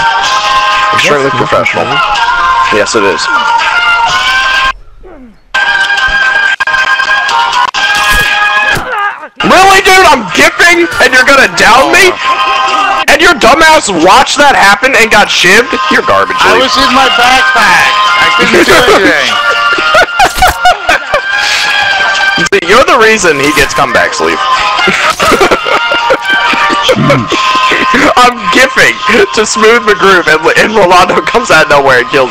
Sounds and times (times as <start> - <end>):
Music: 0.0 - 4.8, 5.5 - 32.3
Speech: 0.9 - 2.0, 8.9 - 12.2, 13.1 - 19.4, 22.4 - 24.4, 27.9 - 32.3.